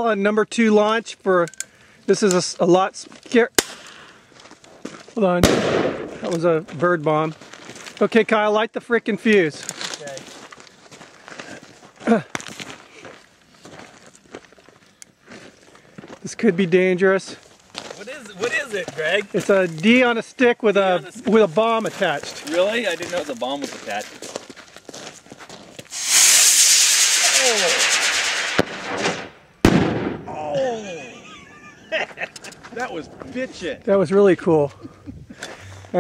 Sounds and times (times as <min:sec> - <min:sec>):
Firecracker: 0:03.6 - 0:04.0, 0:05.4 - 0:06.4, 0:25.9 - 0:30.4
Speech: 0:08.0 - 0:10.3, 0:18.0 - 0:24.2, 0:30.3 - 0:31.2, 0:32.7 - 0:34.8.